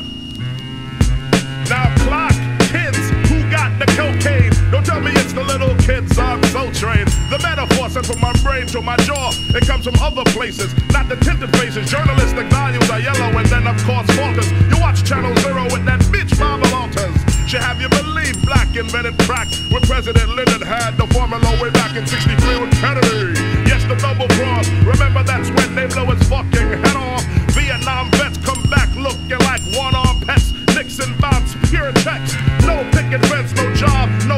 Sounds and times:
Soul music: 0.0s - 34.3s
Rock and roll: 0.8s - 34.3s
Punk rock: 0.9s - 34.3s.

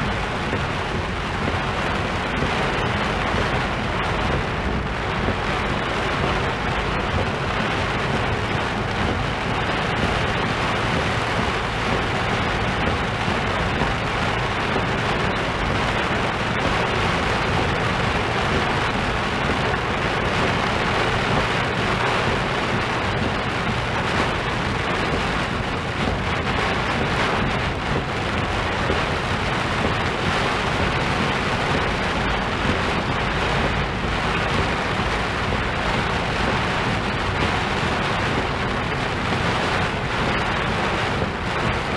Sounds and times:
Rain: 0.0s - 41.9s.

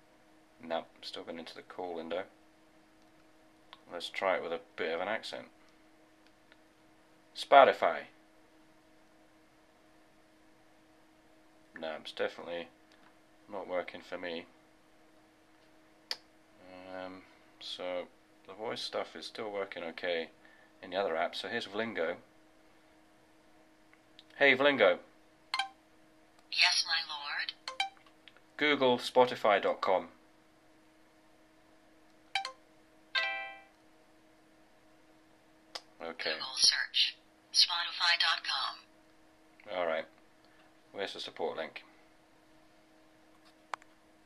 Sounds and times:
Inside, small room: 0.0s - 44.2s
Speech: 0.6s - 2.3s, 3.8s - 5.5s, 7.4s - 8.2s, 11.8s - 12.8s, 13.5s - 14.5s, 16.6s - 22.3s, 24.3s - 25.1s, 26.6s - 27.5s, 28.6s - 30.2s, 36.0s - 38.8s, 39.6s - 40.2s, 40.9s - 41.9s.

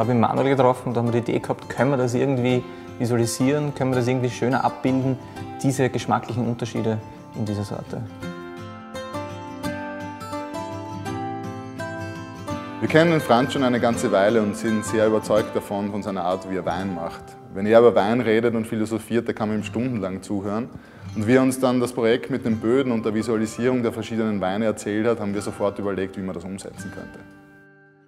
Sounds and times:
Speech: 0.0s - 8.1s, 12.8s - 27.3s
Music: 0.0s - 28.0s.

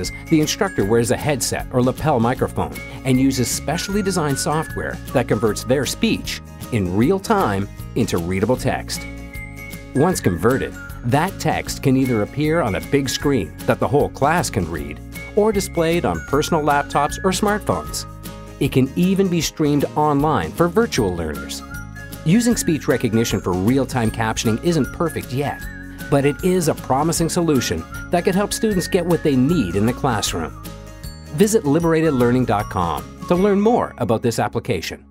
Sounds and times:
Speech: 0.0s - 9.0s, 10.0s - 21.6s, 22.3s - 30.5s, 31.4s - 35.1s
Music: 0.0s - 35.1s.

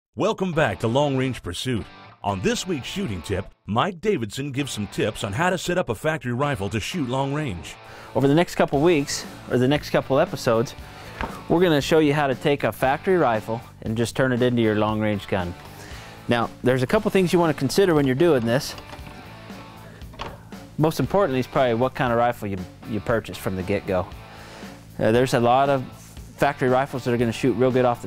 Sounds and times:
Speech: 0.2s - 10.8s, 11.5s - 15.6s, 16.3s - 18.8s, 20.8s - 24.1s, 25.0s - 28.0s
Music: 0.2s - 28.0s.

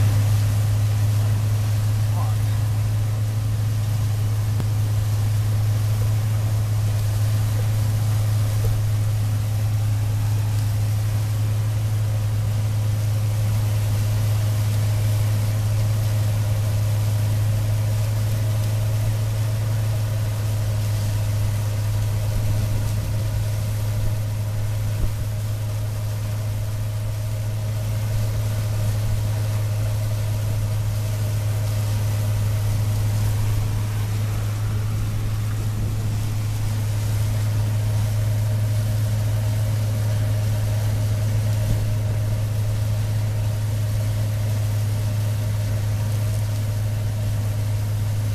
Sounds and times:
Vehicle: 0.0s - 48.3s.

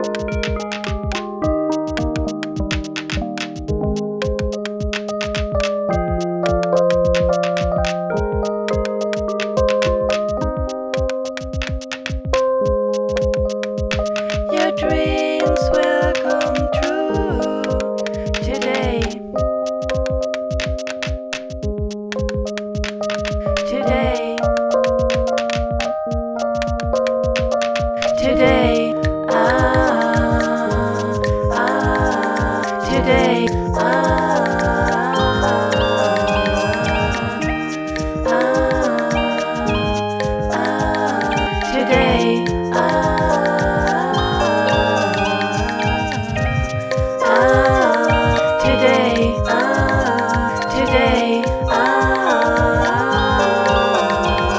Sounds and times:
Music: 0.0s - 54.5s.

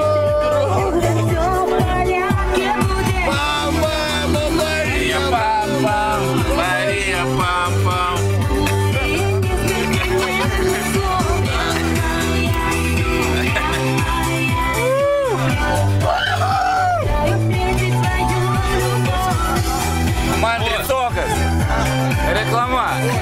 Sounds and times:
Music: 0.0s - 23.2s.

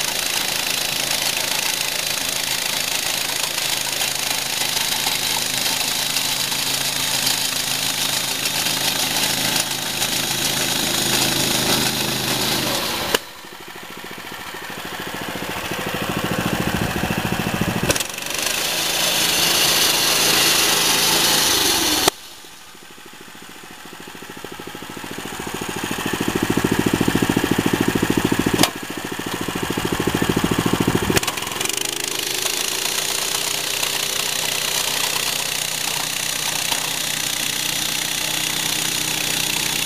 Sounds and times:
Lawn mower: 0.0s - 39.8s.

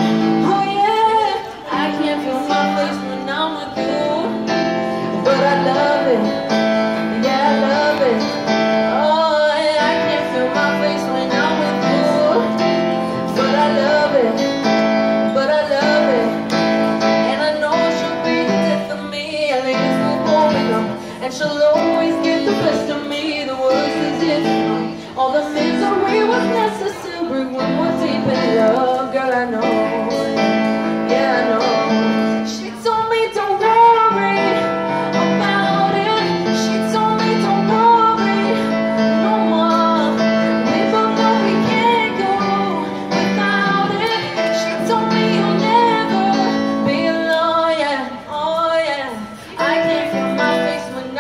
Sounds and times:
Female singing: 0.0s - 51.2s
Music: 0.0s - 51.2s.

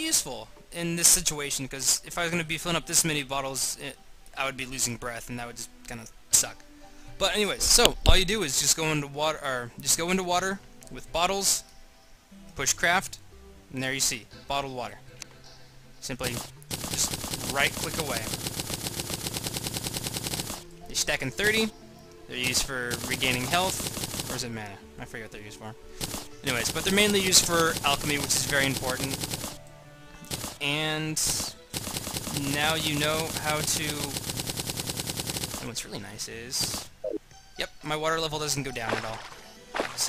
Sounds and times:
Speech: 0.0s - 6.6s, 7.2s - 11.6s, 12.6s - 15.0s, 16.0s - 16.4s, 17.5s - 18.3s, 20.9s - 21.7s, 22.3s - 25.8s, 26.4s - 29.2s, 30.6s - 31.6s, 32.4s - 34.1s, 35.6s - 36.8s, 37.6s - 39.3s, 39.9s - 40.0s.

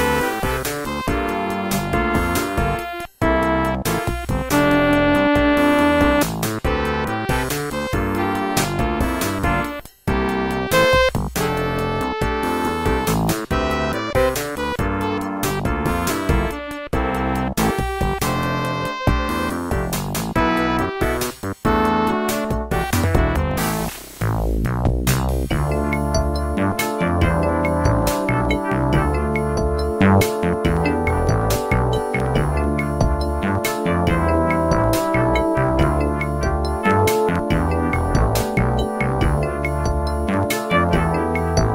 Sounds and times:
Theme music: 0.0s - 9.7s, 21.7s - 24.5s, 25.5s - 41.7s
Video game music: 0.0s - 41.7s.

